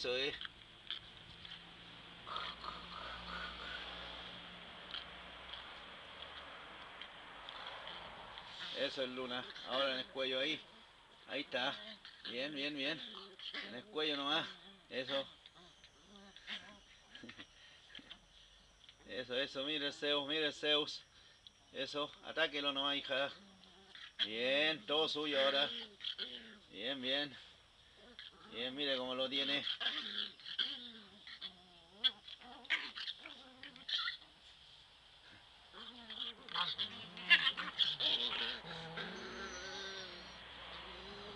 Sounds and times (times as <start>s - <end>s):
Speech: 28.5s - 29.7s.